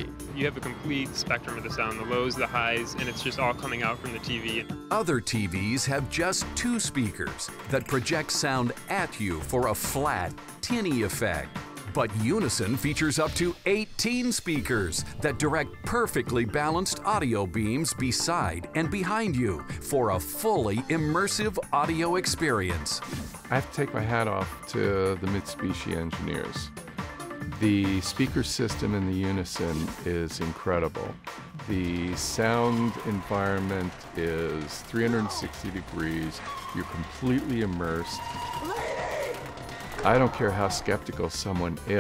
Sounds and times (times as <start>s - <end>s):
Speech: 0.0s - 26.7s, 27.6s - 38.4s, 40.0s - 42.0s
Music: 0.0s - 42.0s.